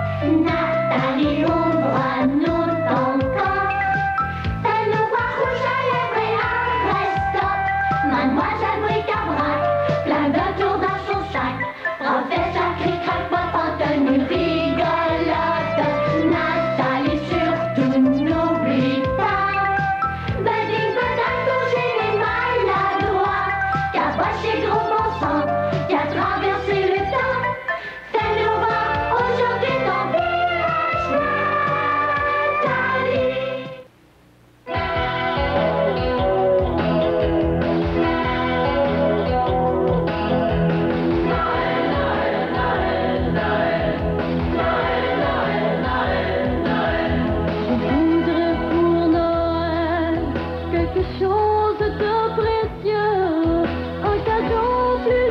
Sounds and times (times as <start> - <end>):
Music: 0.0 - 34.0, 34.6 - 55.3.